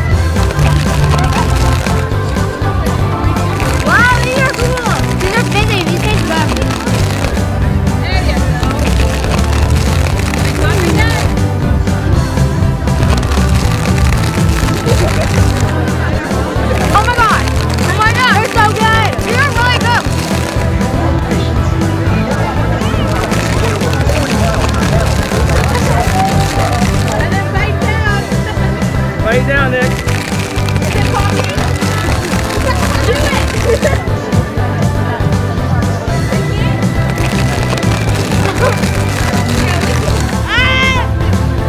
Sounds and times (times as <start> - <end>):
Music: 0.0 - 41.6.